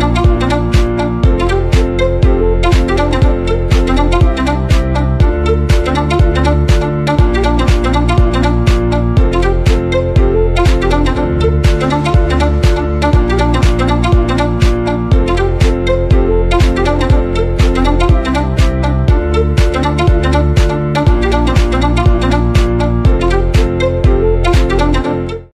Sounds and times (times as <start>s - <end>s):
Music: 0.0s - 25.5s.